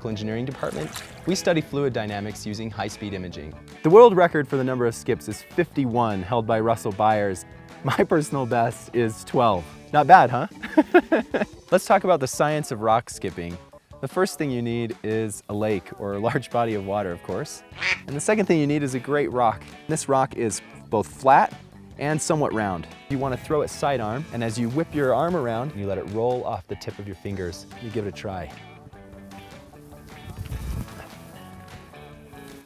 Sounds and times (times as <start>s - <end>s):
Speech: 0.0s - 10.5s, 11.7s - 28.6s
Music: 0.0s - 32.6s.